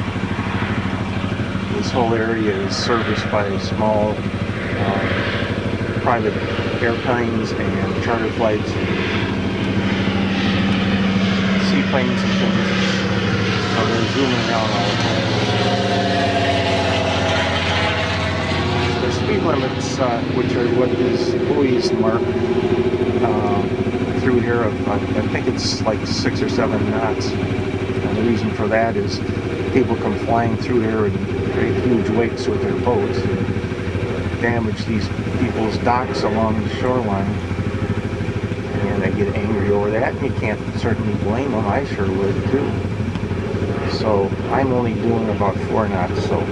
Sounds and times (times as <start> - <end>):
Propeller, airscrew: 0.0 - 46.5
Speech: 1.6 - 5.4, 6.0 - 9.2, 11.4 - 13.0, 13.6 - 15.3, 19.0 - 22.4, 23.2 - 27.4, 28.0 - 33.4, 34.4 - 37.5, 38.7 - 42.9, 43.8 - 46.5.